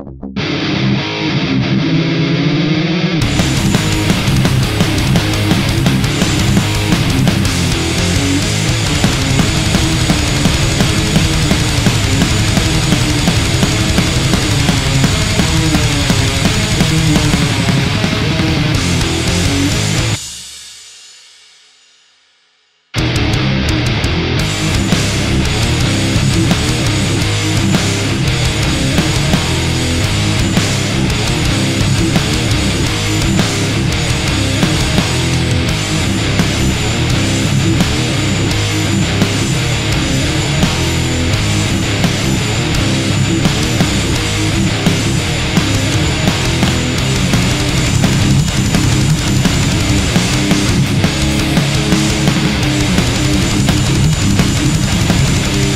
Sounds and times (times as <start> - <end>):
Electric guitar: 0.0 - 20.3, 23.0 - 55.7
Strum: 0.0 - 20.3, 23.0 - 55.7.